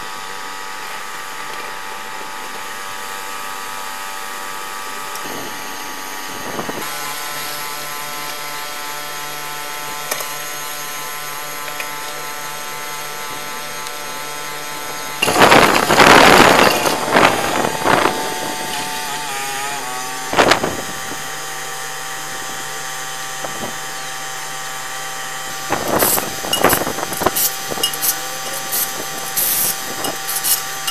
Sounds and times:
Vehicle: 0:00.0 - 0:30.9.

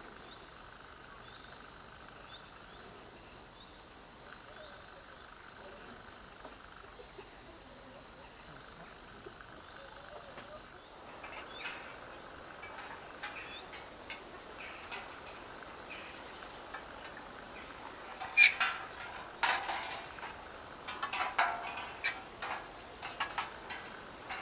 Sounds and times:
Outside, rural or natural: 0:00.0 - 0:24.4.

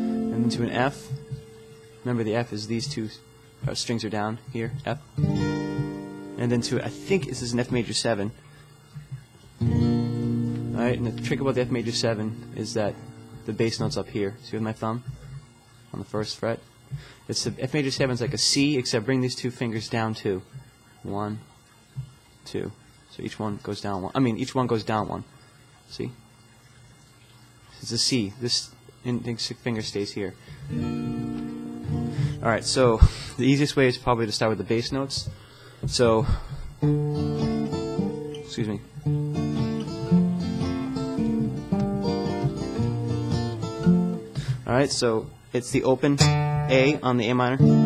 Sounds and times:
Music: 0:00.0 - 0:01.9, 0:05.2 - 0:07.3, 0:09.6 - 0:13.5, 0:30.6 - 0:32.8, 0:36.8 - 0:44.6, 0:46.2 - 0:47.8
Speech: 0:00.3 - 0:01.2, 0:02.0 - 0:05.0, 0:06.4 - 0:08.4, 0:10.8 - 0:15.1, 0:15.9 - 0:16.7, 0:17.3 - 0:21.5, 0:22.4 - 0:25.3, 0:25.9 - 0:26.2, 0:27.8 - 0:30.4, 0:32.4 - 0:36.4, 0:38.4 - 0:38.9, 0:44.6 - 0:47.7.

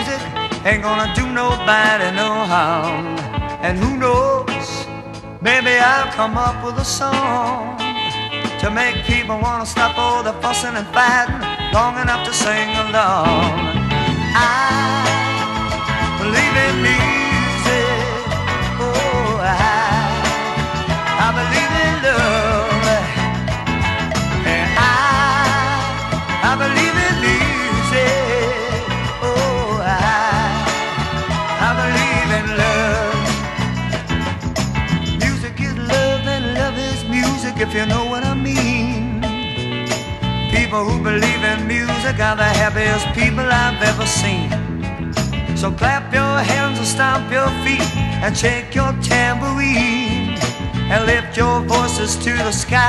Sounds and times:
Music: 0:00.0 - 0:52.8.

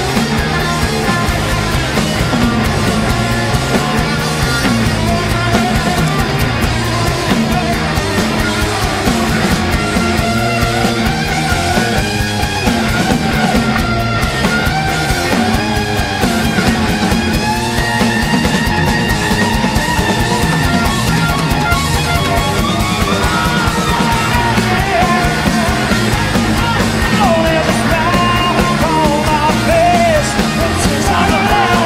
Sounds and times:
Music: 0:00.0 - 0:31.8
Singing: 0:22.8 - 0:31.8.

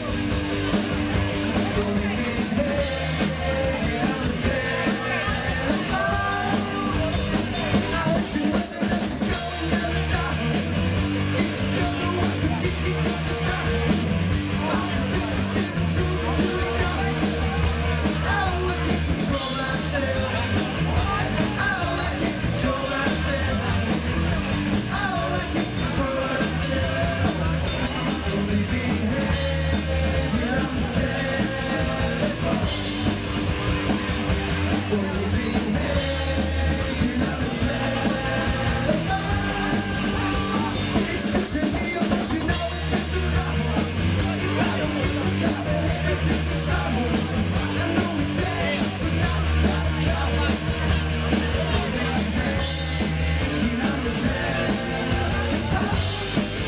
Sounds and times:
Music: 0:00.0 - 0:56.6
Speech: 0:00.0 - 0:56.6.

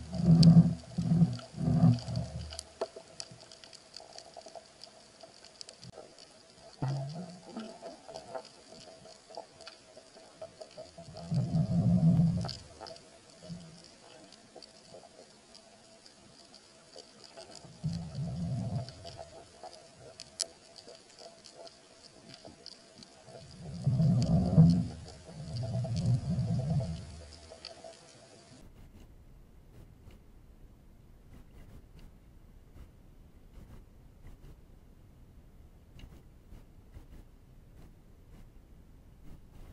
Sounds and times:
Outside, rural or natural: 0:00.0 - 0:39.7.

